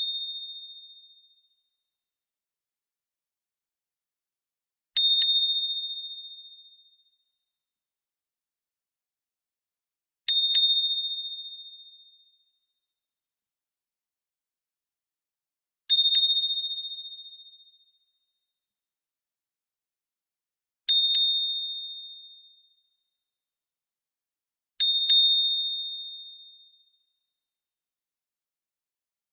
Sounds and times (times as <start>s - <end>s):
Ding: 0.0s - 1.9s, 5.0s - 7.6s, 10.3s - 13.0s, 15.9s - 18.6s, 20.9s - 23.3s, 24.8s - 27.5s.